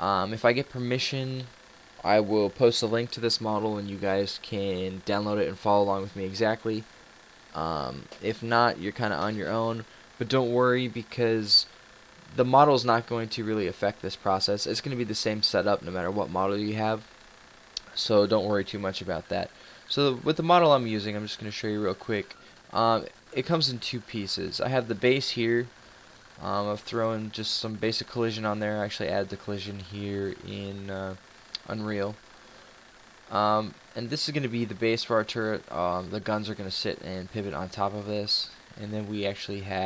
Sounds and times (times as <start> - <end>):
Speech: 0.0 - 6.9, 7.6 - 11.7, 12.3 - 17.1, 17.8 - 25.7, 26.4 - 32.2, 33.3 - 39.8.